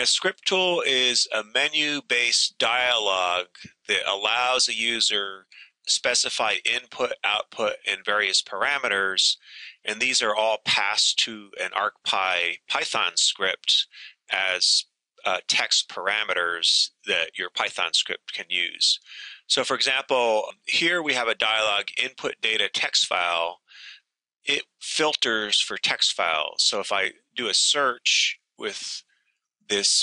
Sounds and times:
Speech: 0.0s - 29.0s, 29.7s - 30.0s.

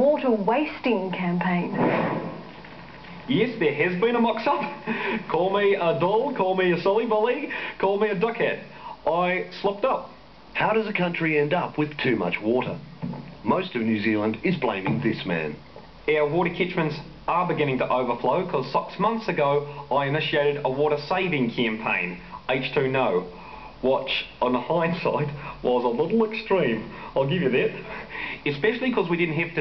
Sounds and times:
Speech: 0.0s - 1.8s, 3.3s - 12.8s, 13.4s - 29.6s.

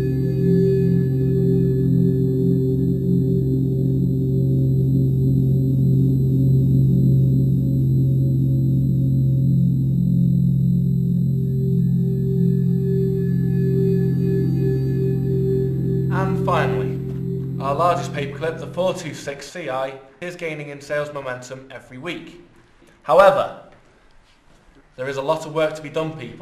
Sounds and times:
Singing bowl: 0.0s - 19.3s.

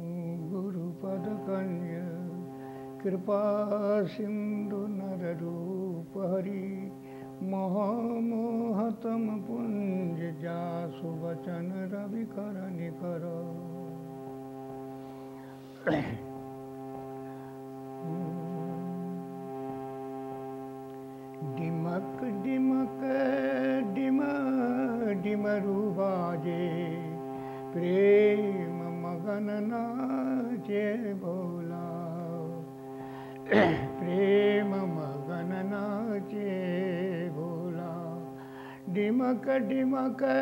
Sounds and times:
Male singing: 0.0s - 14.1s, 21.4s - 32.7s, 33.4s - 38.3s, 38.9s - 40.4s.

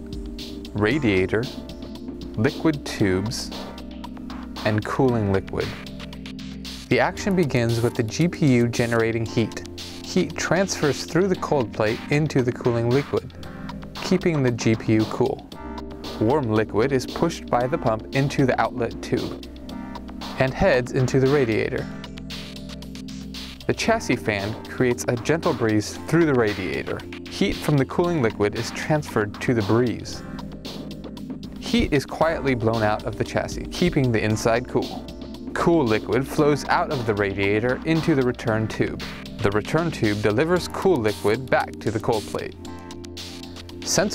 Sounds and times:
Music: 0.0s - 44.1s
Speech: 0.8s - 1.6s, 2.4s - 3.6s, 4.6s - 5.8s, 6.9s - 13.3s, 14.0s - 15.5s, 16.2s - 19.4s, 20.3s - 21.9s, 23.7s - 30.2s, 31.6s - 35.0s, 35.6s - 42.6s, 43.9s - 44.1s.

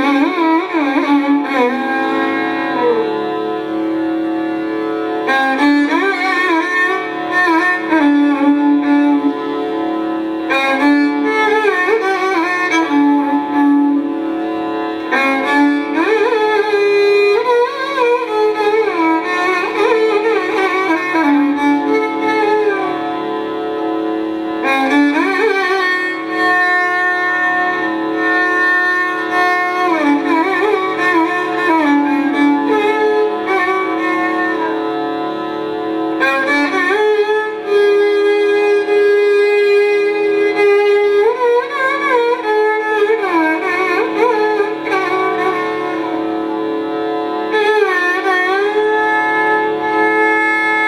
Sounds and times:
Violin, fiddle: 0.0s - 50.8s.

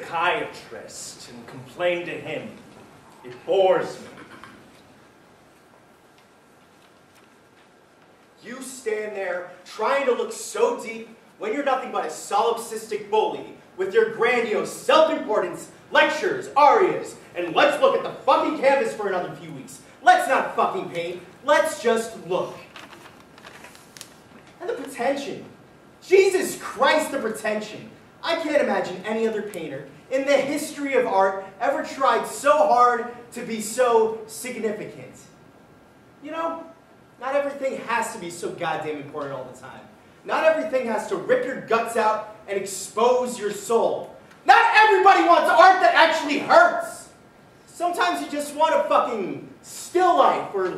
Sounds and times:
Narration, monologue: 0.0s - 50.7s.

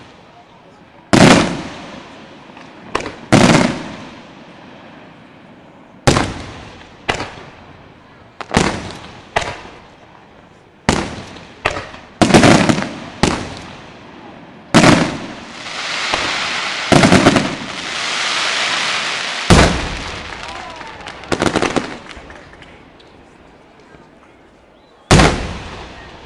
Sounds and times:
Firecracker: 0.0s - 24.2s, 24.8s - 26.2s.

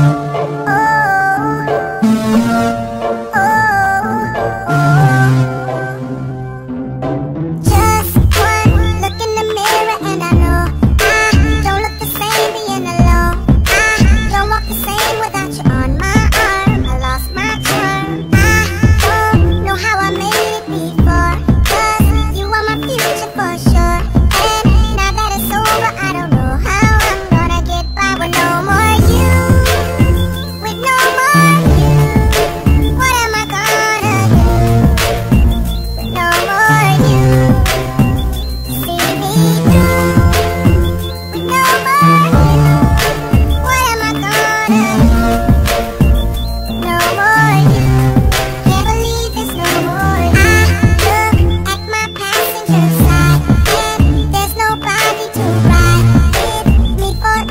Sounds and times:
Music: 0.0s - 57.5s.

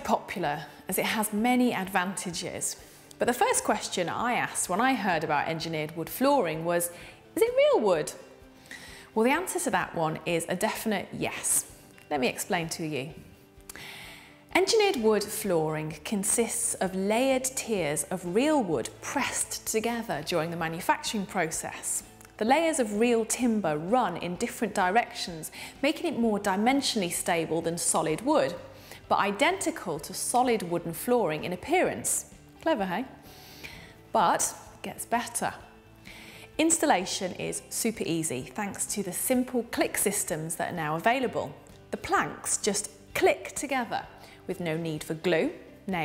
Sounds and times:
Speech: 0.0s - 8.2s, 9.2s - 13.2s, 14.5s - 33.1s, 34.1s - 35.6s, 36.6s - 46.0s.

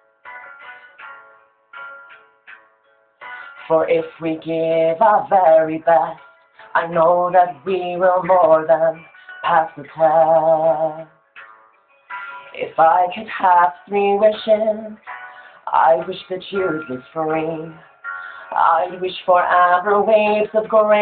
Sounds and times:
Music: 0.0s - 21.0s
Male singing: 3.6s - 11.1s, 12.6s - 21.0s.

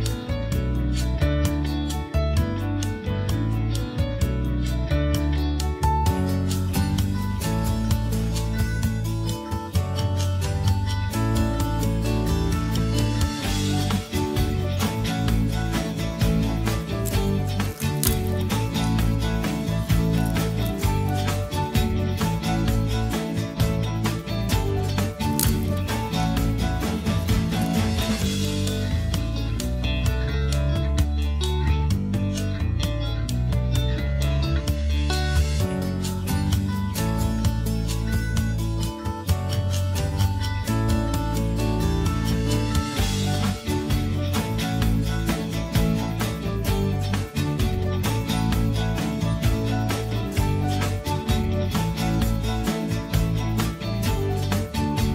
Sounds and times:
Music: 0.0s - 55.1s.

